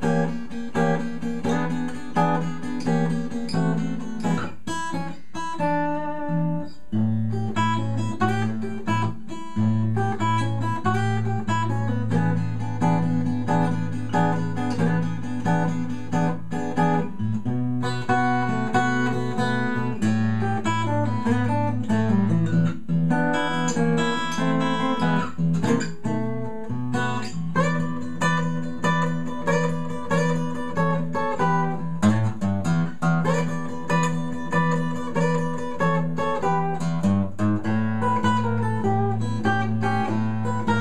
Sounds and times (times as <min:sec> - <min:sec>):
Strum: 0:00.0 - 0:40.8.